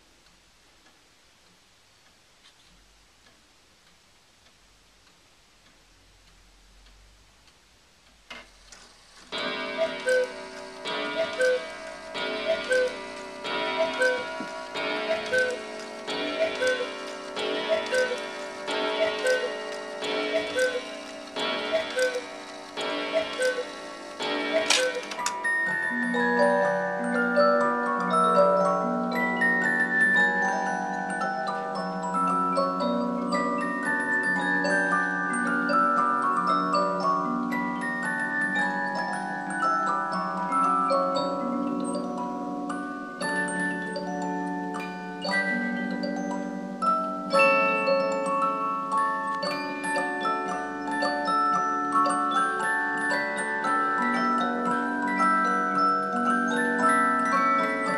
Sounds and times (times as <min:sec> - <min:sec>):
Tick-tock: 0:00.2 - 0:37.1.